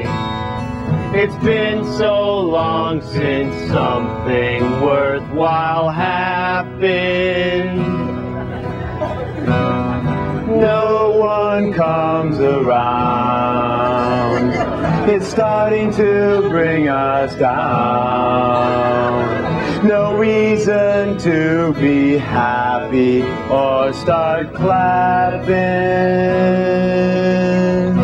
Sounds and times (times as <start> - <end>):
Music: 0.0 - 28.0.